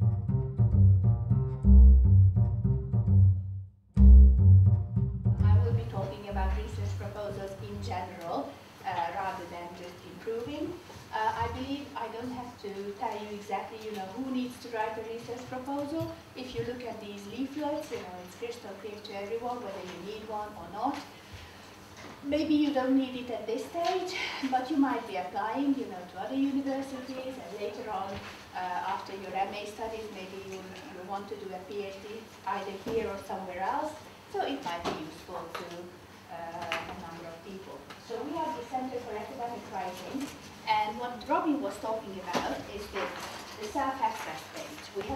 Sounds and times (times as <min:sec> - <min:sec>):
Speech: 0:05.4 - 0:21.1, 0:22.2 - 0:45.1.